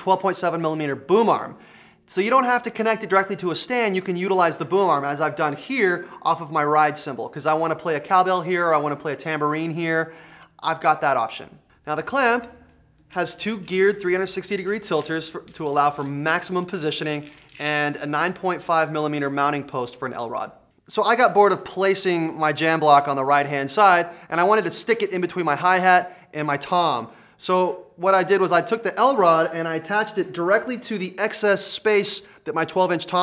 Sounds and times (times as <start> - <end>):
Speech: 0.0 - 33.2.